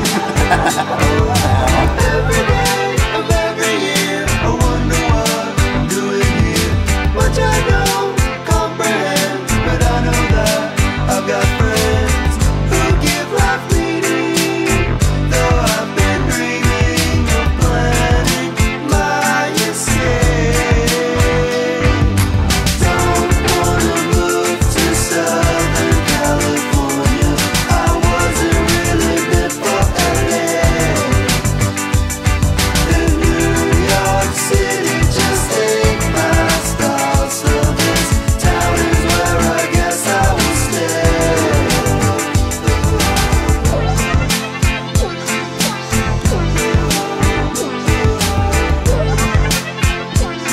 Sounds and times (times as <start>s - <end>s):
Music: 0.0s - 50.5s.